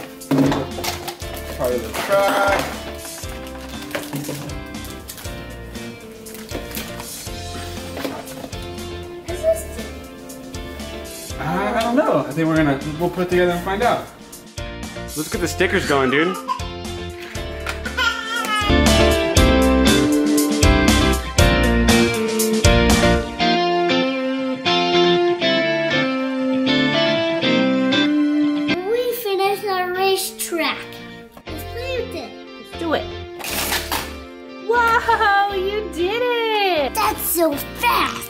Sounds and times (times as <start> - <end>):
Music: 0.0 - 38.2
Child speech, kid speaking: 9.3 - 10.0, 28.8 - 33.1, 35.6 - 38.2.